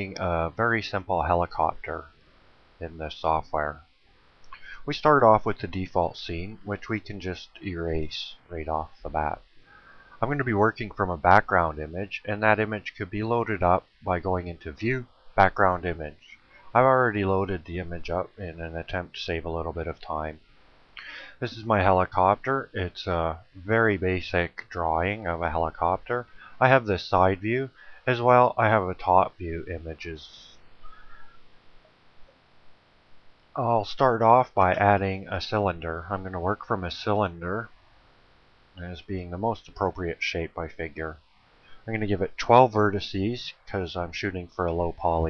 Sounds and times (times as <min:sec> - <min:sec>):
Speech: 0:00.0 - 0:02.1, 0:02.8 - 0:03.8, 0:04.6 - 0:09.4, 0:10.2 - 0:20.4, 0:21.0 - 0:30.6, 0:33.6 - 0:37.7, 0:38.8 - 0:41.2, 0:41.9 - 0:45.2.